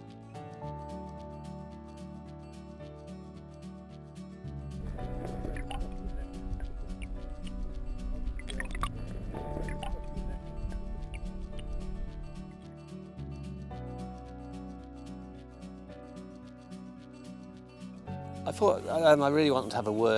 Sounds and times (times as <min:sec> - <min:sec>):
Music: 0:00.0 - 0:20.1
Speech: 0:18.5 - 0:20.1.